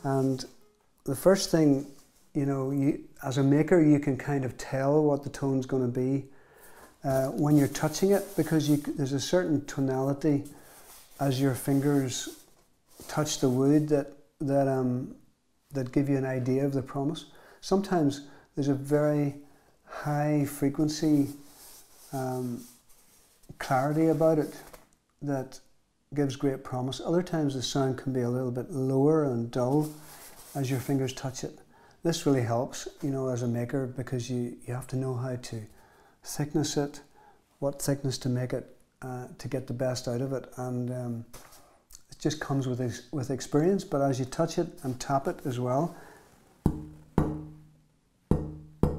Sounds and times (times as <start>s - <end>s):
Speech: 0.0s - 6.3s, 7.0s - 10.6s, 11.2s - 21.4s, 22.1s - 22.8s, 23.5s - 46.0s.